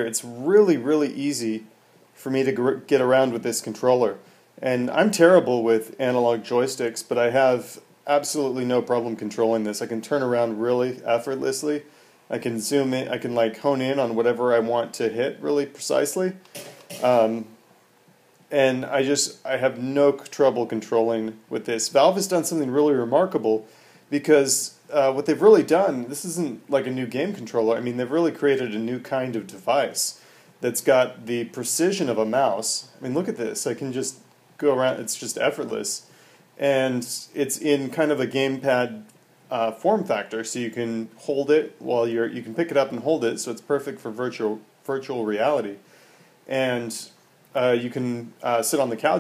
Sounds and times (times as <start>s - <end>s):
Speech: 0.0s - 17.6s, 18.5s - 45.8s, 46.5s - 49.2s.